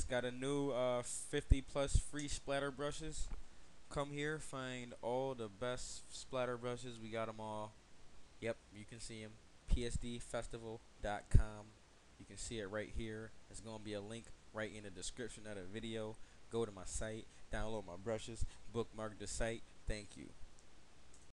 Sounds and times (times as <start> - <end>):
Speech: 0.0 - 3.3, 3.9 - 7.8, 8.4 - 20.4.